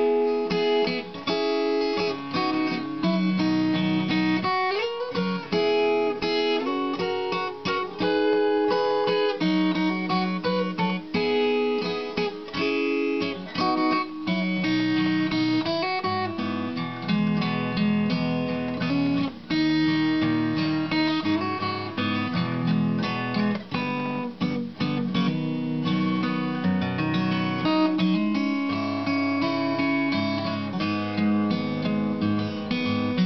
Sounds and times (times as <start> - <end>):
Acoustic guitar: 0.0 - 33.2.